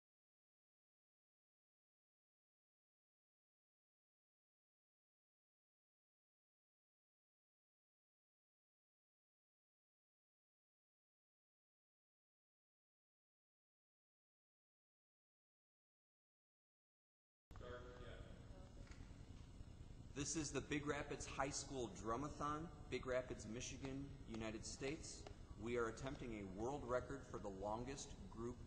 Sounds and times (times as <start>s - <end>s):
Speech: 17.6s - 18.3s, 20.2s - 28.6s.